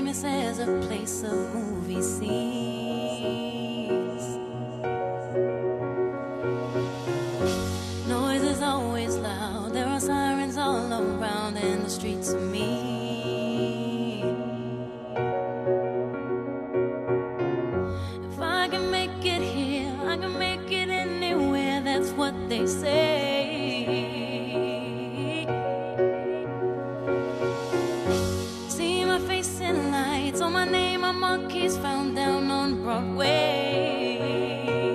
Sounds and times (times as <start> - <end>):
Piano: 0.0 - 34.9.